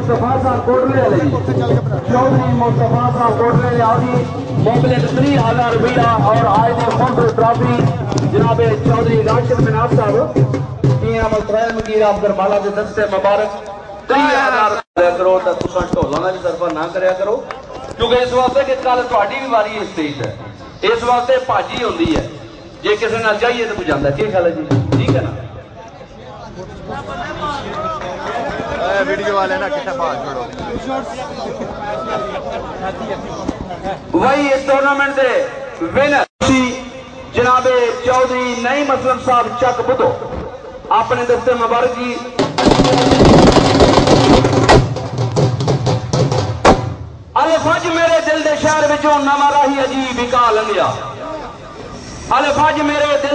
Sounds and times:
Speech: 0.0s - 40.3s, 40.9s - 42.4s, 47.4s - 51.6s, 52.3s - 53.3s
Music: 1.6s - 11.1s, 44.2s - 47.2s.

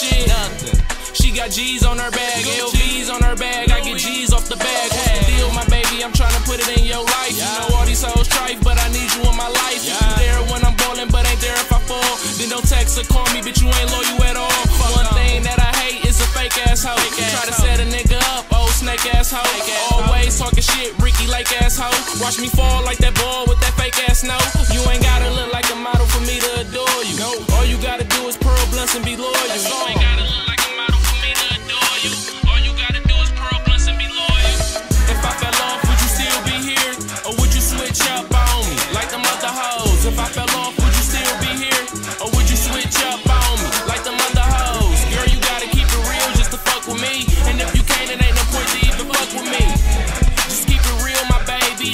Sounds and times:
Music: 0.0s - 51.9s
Rapping: 0.0s - 51.9s.

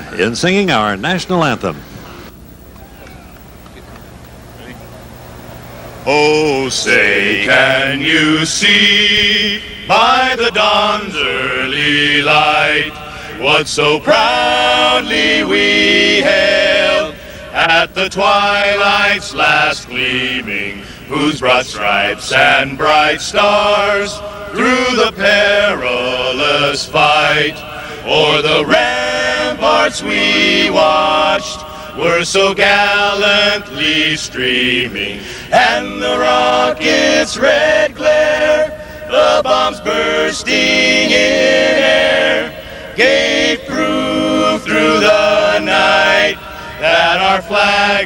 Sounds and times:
Choir: 6.1s - 48.0s
Male singing: 6.1s - 48.0s.

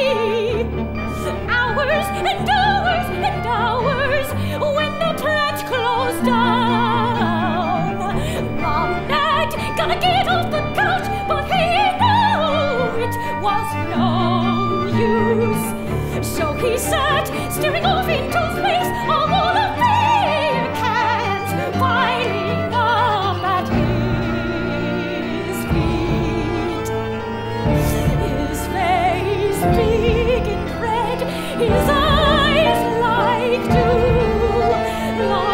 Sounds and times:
Opera: 0.0s - 35.5s.

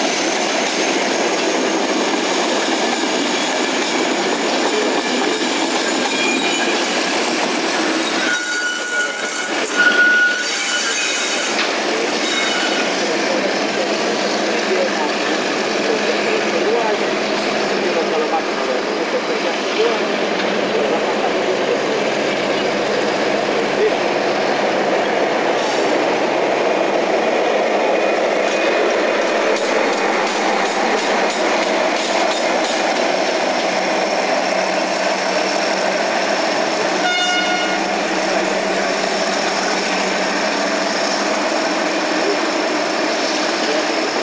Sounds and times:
Railroad car, train wagon: 0.0s - 44.2s
Train: 0.0s - 44.2s.

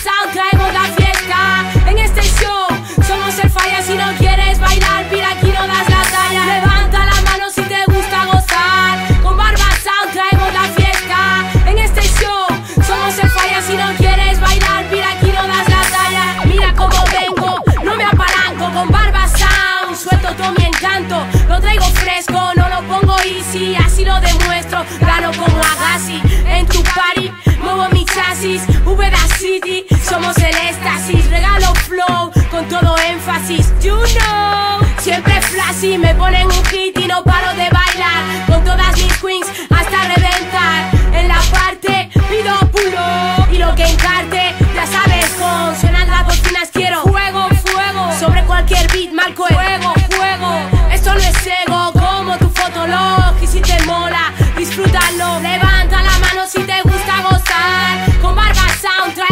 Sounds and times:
Music: 0.0s - 59.3s.

